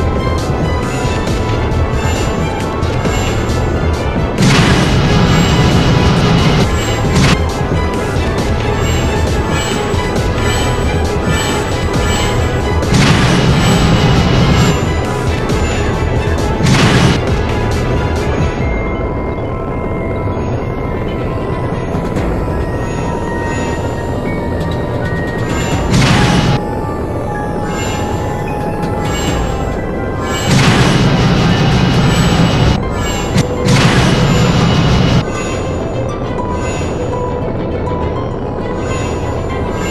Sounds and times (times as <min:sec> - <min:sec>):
Music: 0:00.0 - 0:39.9.